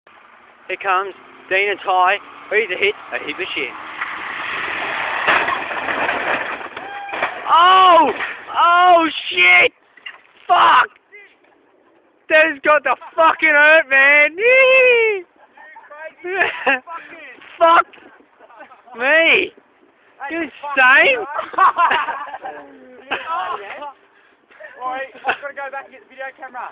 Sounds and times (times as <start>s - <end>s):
Outside, urban or manmade: 0.0s - 26.7s
Car: 0.1s - 10.5s.